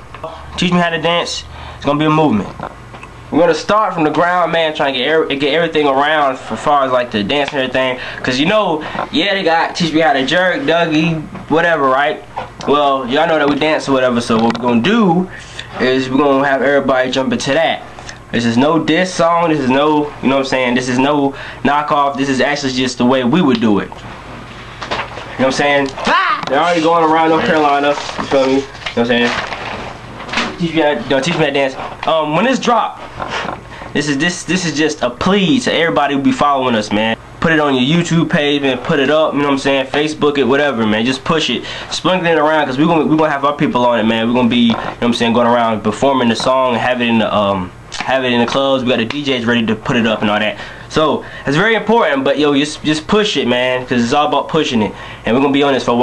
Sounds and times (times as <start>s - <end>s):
Speech: 0.2s - 2.6s, 3.3s - 24.0s, 25.4s - 29.4s, 30.4s - 33.1s, 33.9s - 56.0s.